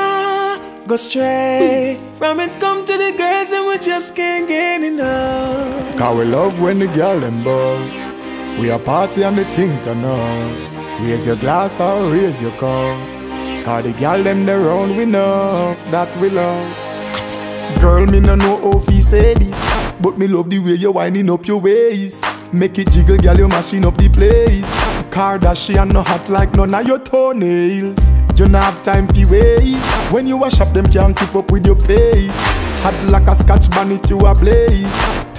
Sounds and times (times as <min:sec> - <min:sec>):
Music: 0:00.0 - 0:35.3.